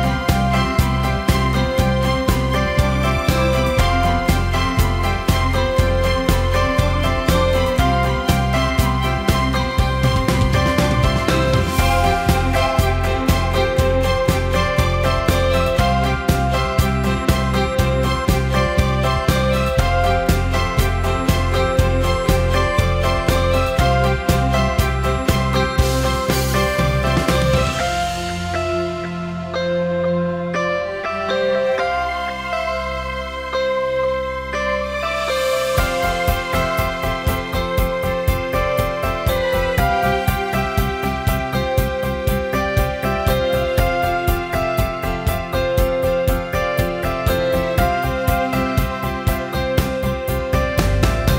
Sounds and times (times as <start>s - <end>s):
Music: 0.0s - 51.3s.